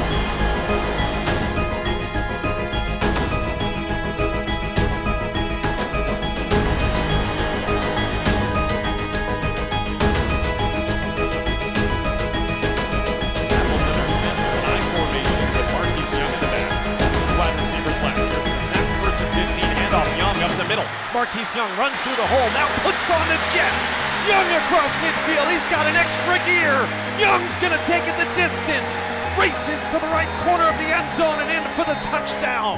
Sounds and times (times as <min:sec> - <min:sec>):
Music: 0:00.0 - 0:32.7
Speech: 0:13.6 - 0:32.7.